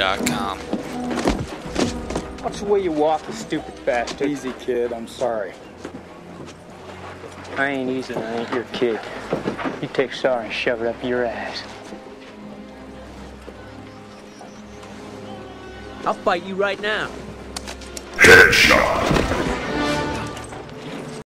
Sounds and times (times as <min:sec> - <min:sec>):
Music: 0:00.0 - 0:21.2
Speech: 0:18.2 - 0:19.2.